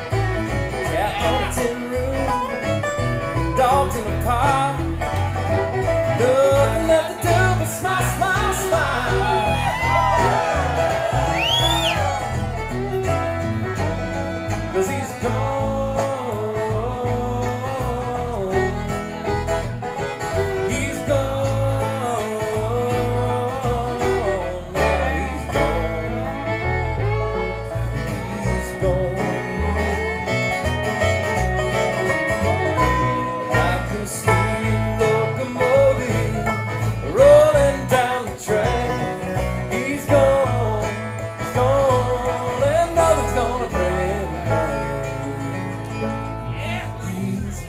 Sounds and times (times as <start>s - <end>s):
Bluegrass: 0.0s - 47.6s.